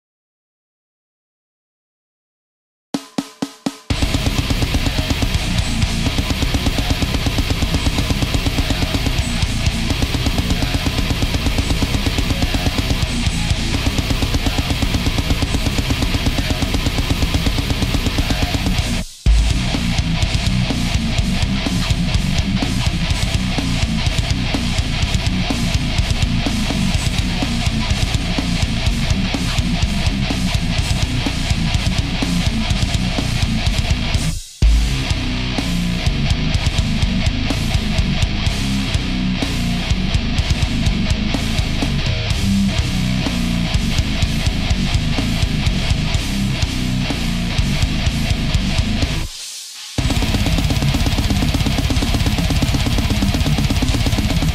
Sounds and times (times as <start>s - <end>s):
Music: 3.0s - 54.5s.